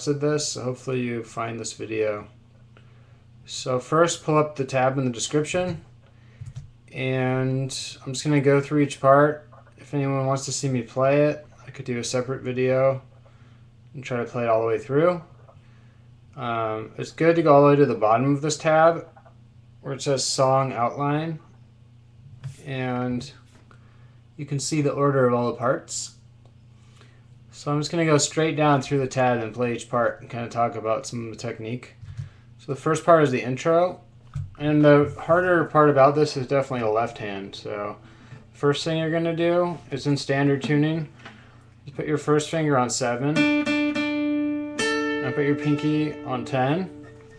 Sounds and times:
Speech: 0.0s - 2.4s, 3.5s - 5.9s, 6.9s - 13.1s, 13.9s - 15.3s, 16.4s - 19.2s, 19.8s - 21.5s, 22.5s - 23.5s, 24.4s - 26.2s, 27.5s - 32.0s, 32.6s - 38.0s, 38.6s - 41.1s, 41.9s - 43.4s, 45.2s - 47.0s.

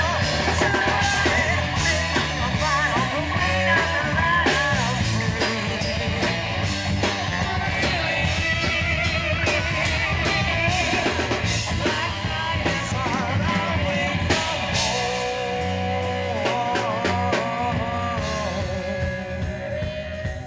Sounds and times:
Bass guitar: 0.0s - 20.4s
Electric guitar: 0.0s - 20.4s.

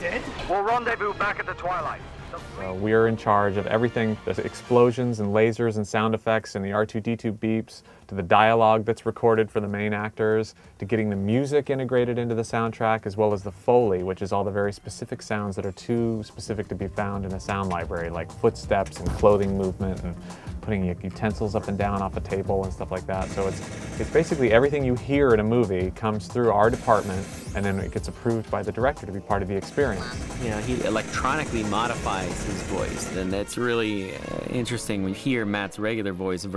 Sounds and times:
Music: 0.0s - 36.5s
Speech: 0.0s - 36.5s.

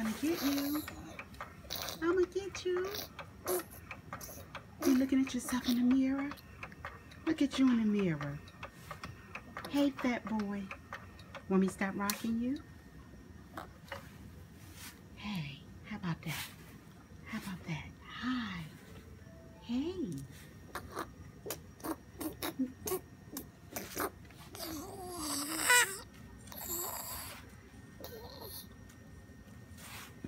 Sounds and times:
Speech: 0.0s - 0.9s, 4.8s - 6.4s, 7.2s - 8.4s, 9.7s - 10.7s, 11.5s - 12.6s, 17.3s - 18.8s, 19.6s - 20.3s.

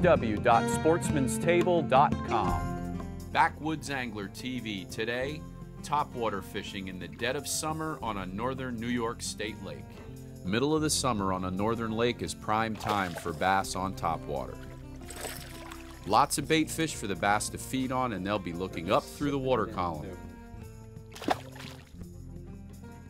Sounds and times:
Speech: 0.0s - 2.6s, 3.4s - 9.8s, 10.5s - 14.6s, 16.1s - 20.2s
Music: 0.0s - 23.1s
Pour: 15.0s - 16.1s.

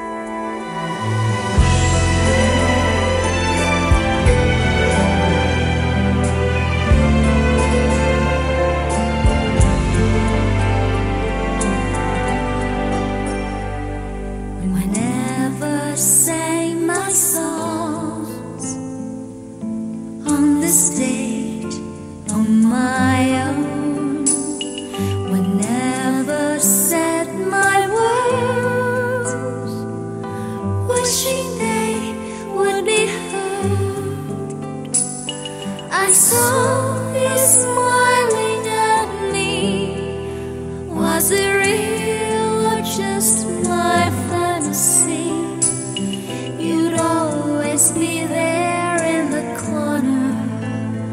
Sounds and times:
Sad music: 0.0s - 51.1s.

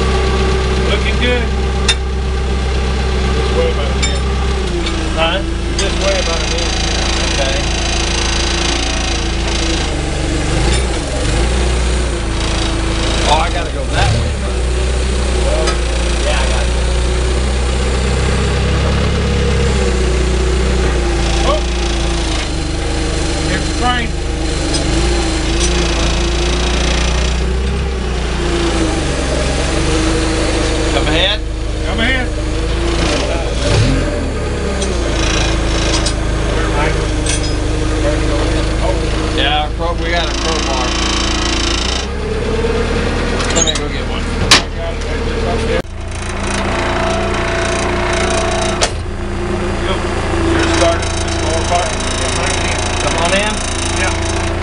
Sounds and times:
Vehicle: 0.0s - 54.6s
Speech: 0.8s - 1.6s, 3.4s - 4.3s, 5.1s - 7.7s, 13.2s - 14.6s, 15.4s - 16.8s, 21.4s - 21.8s, 23.5s - 24.2s, 30.9s - 32.4s, 33.0s - 33.7s, 36.4s - 37.1s, 37.9s - 41.0s, 43.5s - 45.9s, 49.8s - 54.2s.

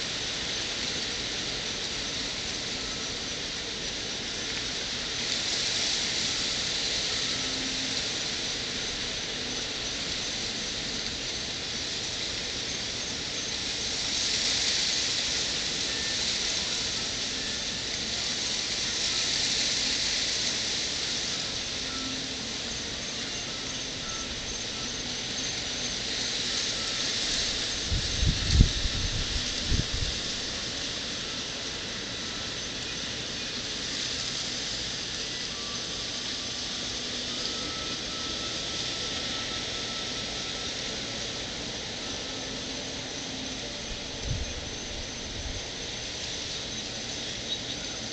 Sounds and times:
Music: 19.8s - 28.7s, 34.7s - 40.8s.

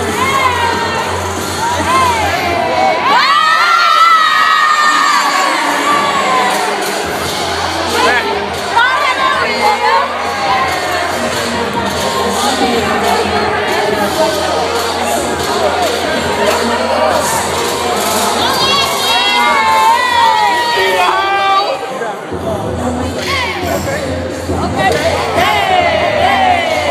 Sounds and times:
Inside, public space: 0.0s - 26.9s
Music: 0.0s - 26.9s.

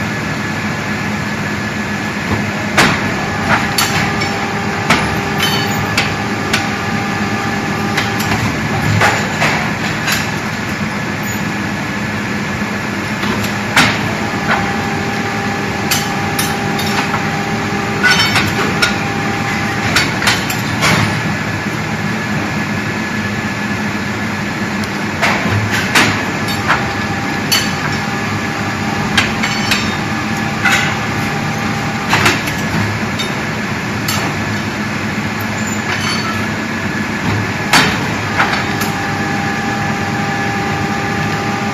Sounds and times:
Engine: 0.0s - 41.7s.

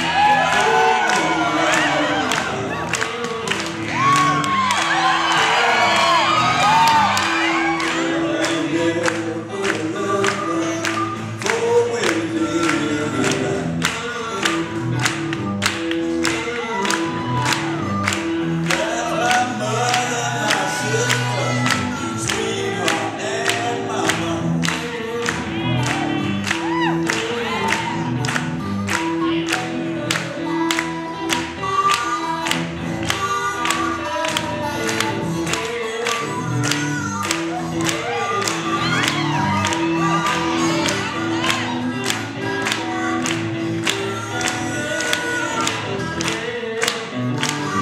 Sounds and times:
Music: 0.0s - 47.8s.

